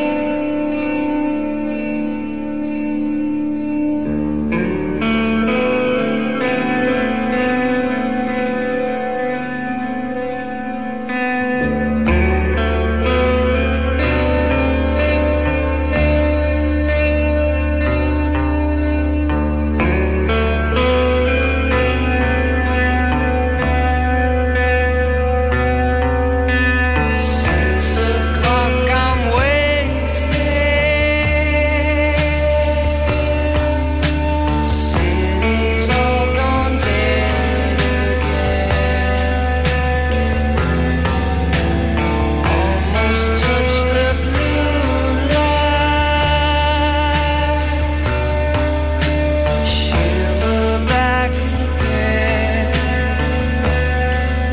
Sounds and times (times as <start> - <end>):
Music: 0.0 - 54.5.